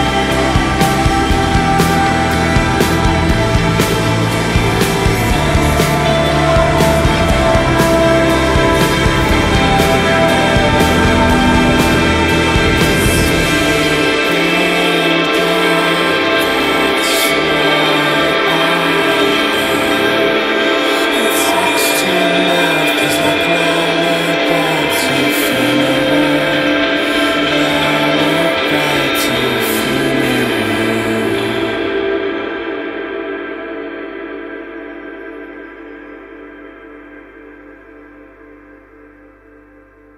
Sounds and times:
Gong: 0:00.0 - 0:38.8.

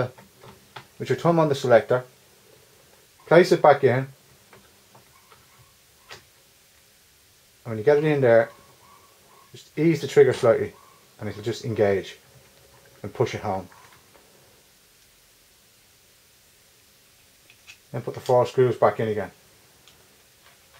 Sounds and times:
Speech: 0:01.0 - 0:02.1, 0:03.3 - 0:04.2, 0:07.6 - 0:08.5, 0:09.6 - 0:12.2, 0:13.0 - 0:13.7, 0:17.9 - 0:19.4.

